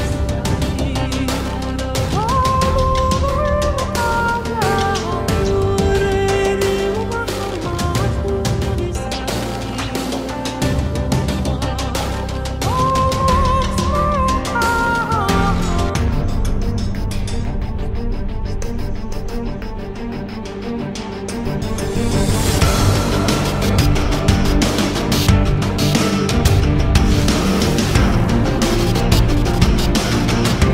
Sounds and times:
Music: 0.0s - 30.7s.

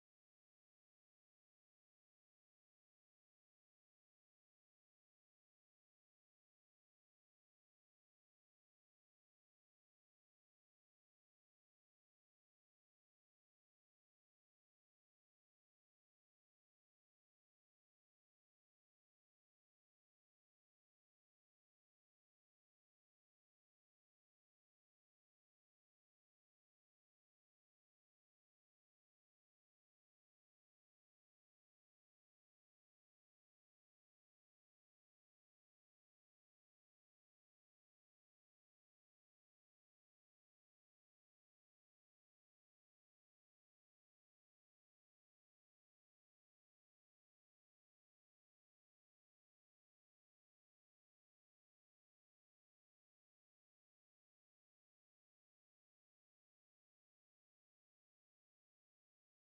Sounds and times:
Silence: 0.0s - 59.5s.

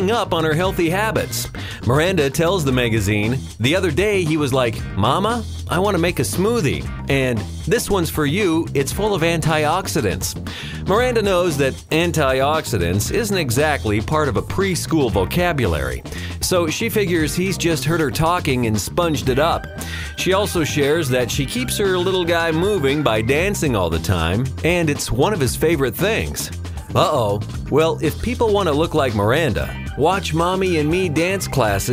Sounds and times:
Music: 0.0s - 31.9s
Speech: 0.0s - 31.9s.

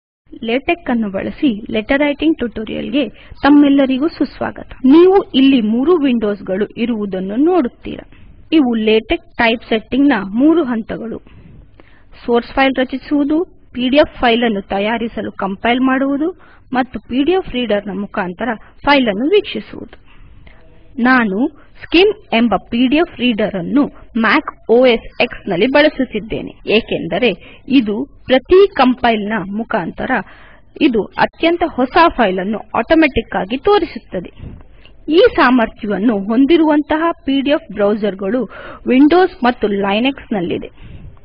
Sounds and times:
Speech: 0.3s - 11.2s, 12.2s - 20.0s, 21.0s - 34.5s, 35.1s - 40.8s.

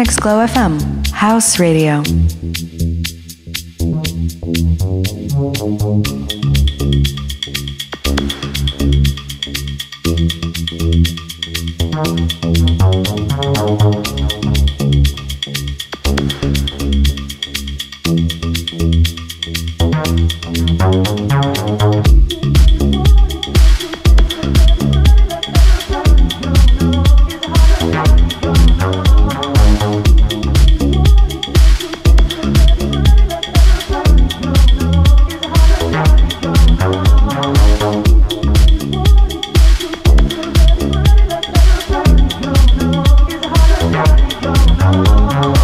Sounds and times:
Music: 0.0s - 45.6s.

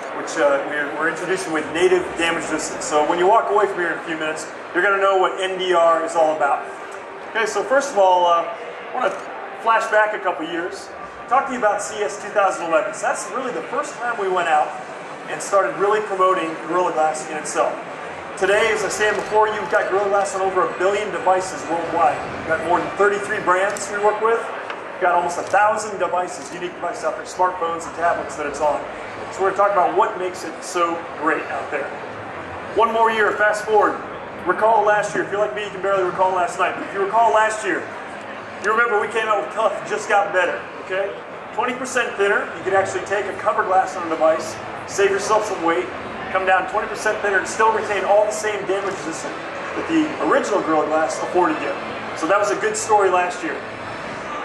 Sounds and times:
Speech: 0.0s - 32.0s, 32.8s - 37.9s, 38.6s - 53.7s.

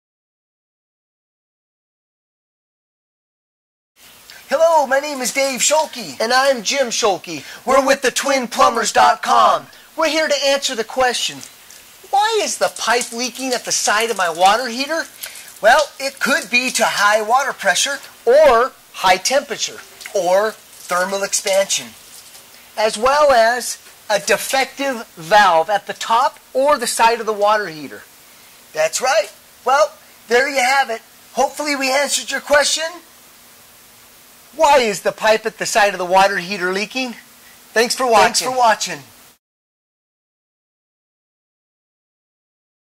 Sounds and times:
Speech: 4.4s - 22.0s, 22.8s - 28.1s, 28.8s - 33.1s, 34.6s - 39.1s.

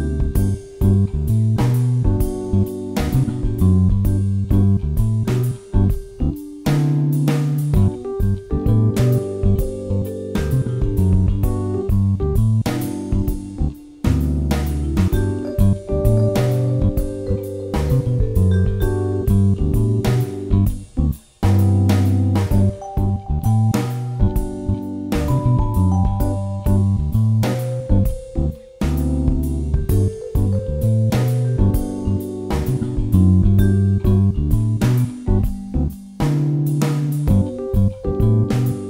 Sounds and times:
Jazz: 0.0s - 38.8s.

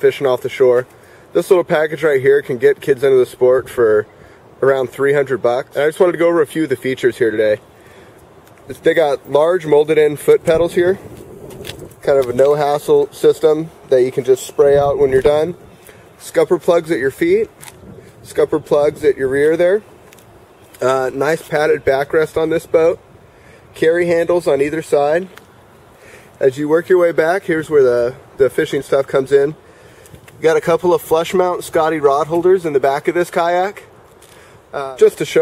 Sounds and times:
Speech: 0.0s - 7.6s, 8.7s - 11.0s, 12.0s - 15.6s, 16.2s - 17.5s, 18.3s - 19.9s, 20.8s - 23.0s, 23.8s - 25.4s, 26.4s - 29.6s, 30.4s - 33.9s, 34.7s - 35.4s.

